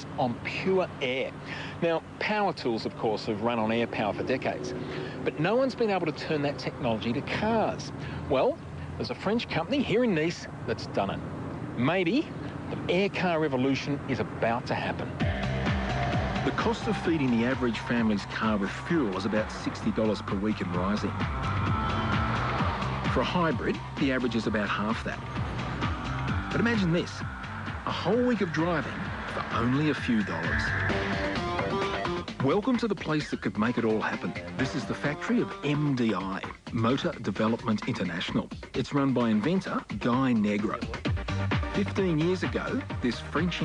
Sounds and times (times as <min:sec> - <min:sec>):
Speech: 0:00.0 - 0:11.2, 0:11.8 - 0:15.2, 0:16.5 - 0:21.1, 0:23.1 - 0:25.2, 0:26.5 - 0:27.2, 0:27.9 - 0:30.7, 0:32.4 - 0:41.0, 0:41.8 - 0:43.6.